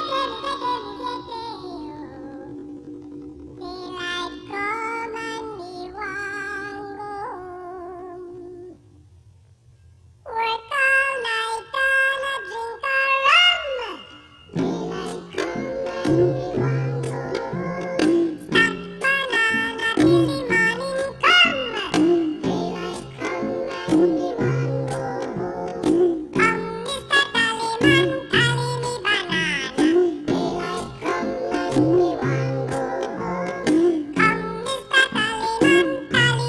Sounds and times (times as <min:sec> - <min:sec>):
Music: 0:14.0 - 0:36.4.